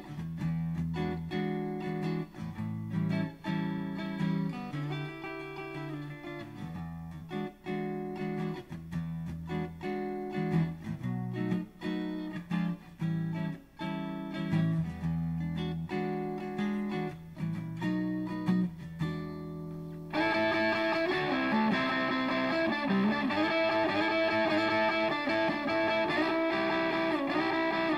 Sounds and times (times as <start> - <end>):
Acoustic guitar: 0.0 - 27.9
Electric guitar: 0.0 - 27.9.